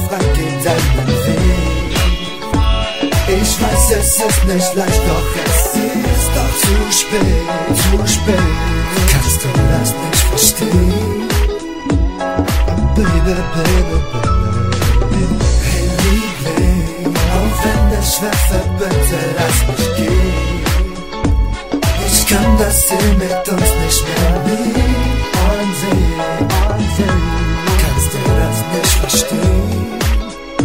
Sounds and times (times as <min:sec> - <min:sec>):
Pop music: 0:00.0 - 0:30.6.